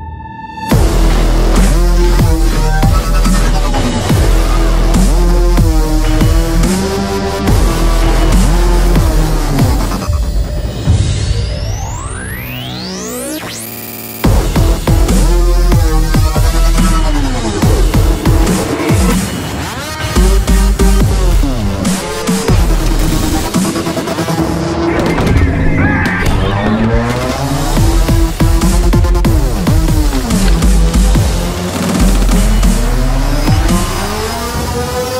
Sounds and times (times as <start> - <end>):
Trance music: 0.0 - 35.1.